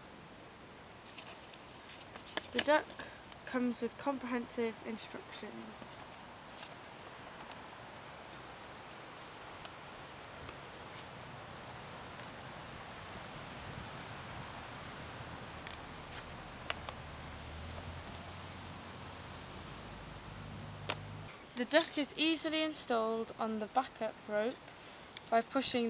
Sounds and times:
Speech: 2.6s - 6.0s, 21.6s - 24.6s, 25.3s - 25.8s.

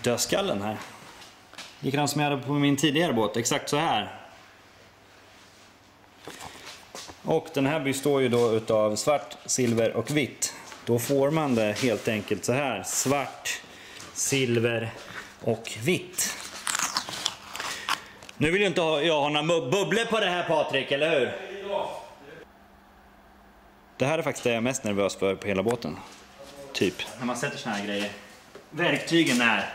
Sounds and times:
Speech: 0.0s - 0.9s, 1.8s - 4.3s, 7.3s - 13.6s, 14.2s - 16.4s, 18.4s - 22.4s, 24.0s - 29.7s.

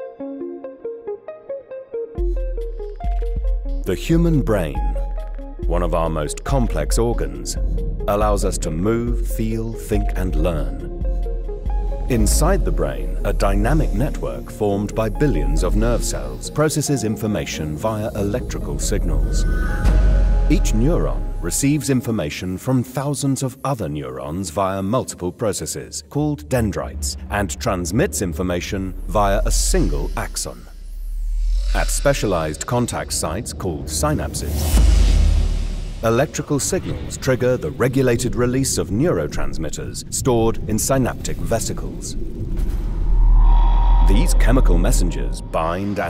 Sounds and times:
Music: 0.0s - 46.1s
Speech: 3.8s - 5.0s, 5.6s - 10.9s, 12.1s - 19.6s, 20.5s - 30.7s, 31.7s - 34.8s, 36.0s - 42.2s, 44.1s - 46.1s.

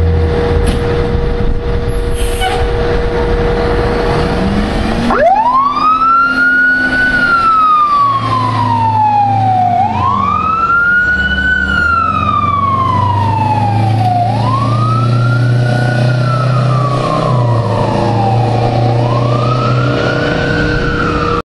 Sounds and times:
Truck: 0.0s - 21.4s.

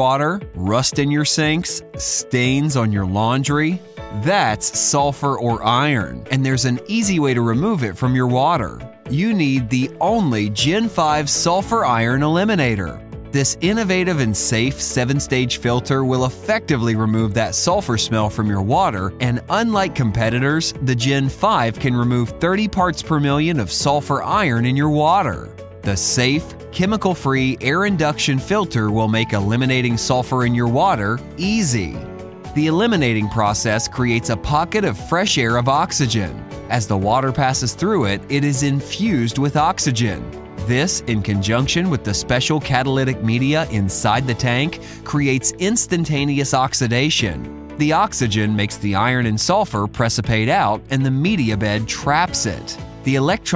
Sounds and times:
Speech: 0.0s - 32.0s, 32.6s - 53.5s
Music: 0.0s - 53.5s.

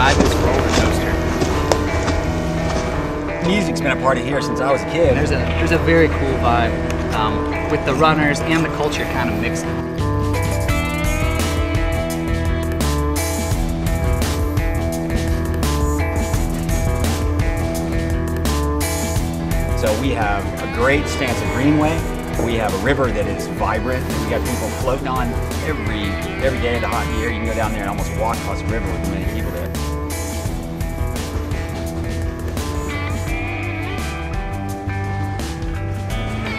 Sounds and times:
Speech: 0.0s - 1.2s, 3.4s - 9.7s, 19.8s - 29.8s
Music: 0.0s - 36.5s.

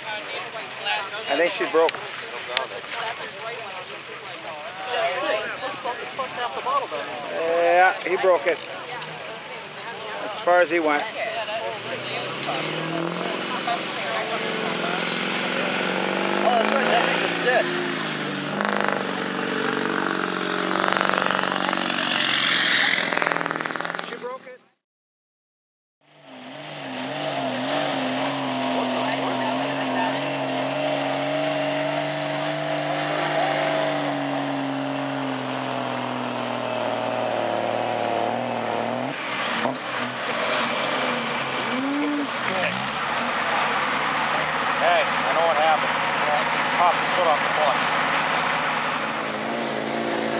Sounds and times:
Speech: 0.0s - 15.2s, 16.4s - 17.7s
Outside, rural or natural: 0.0s - 24.8s, 26.0s - 50.3s
Truck: 0.0s - 24.8s, 26.0s - 50.3s.

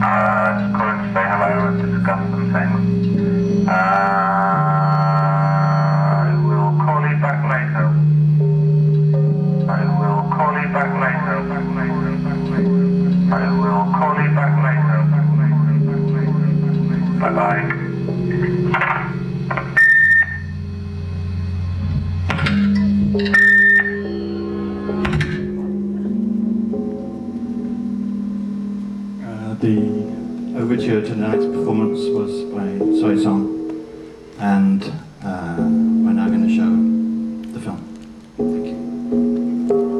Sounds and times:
Musical instrument: 0.0s - 40.0s.

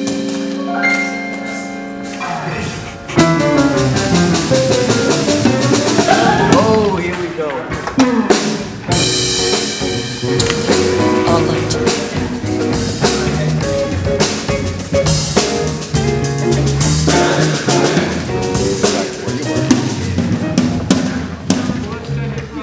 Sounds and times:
Music: 0.0s - 22.6s
Speech: 6.4s - 7.8s, 11.2s - 12.2s, 21.6s - 22.6s.

